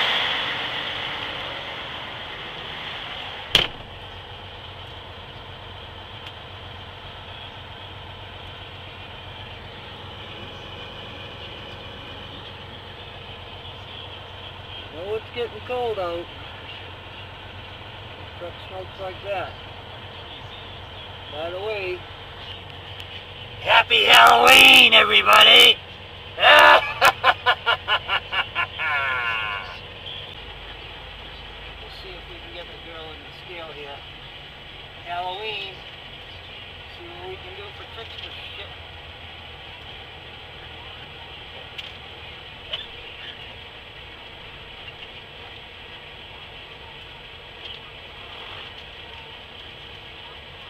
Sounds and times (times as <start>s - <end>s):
Vehicle: 0.0s - 50.6s
Speech: 14.9s - 16.3s, 21.3s - 22.0s, 23.6s - 25.8s, 31.8s - 34.1s, 35.0s - 35.8s, 36.8s - 38.8s.